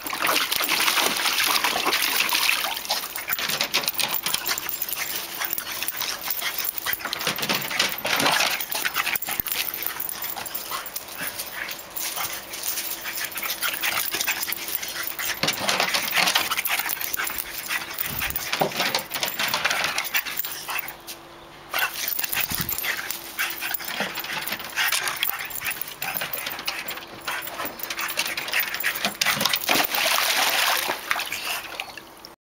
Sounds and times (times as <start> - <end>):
Water: 0.0 - 8.8, 28.2 - 32.4.